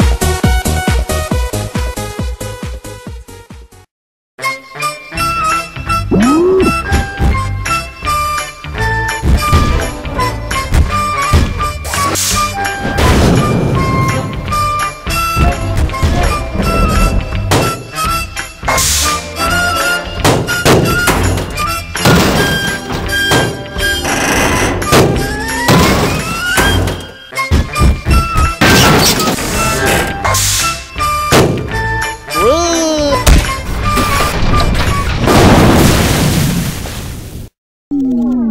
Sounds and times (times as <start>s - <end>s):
Music: 0.0s - 35.2s.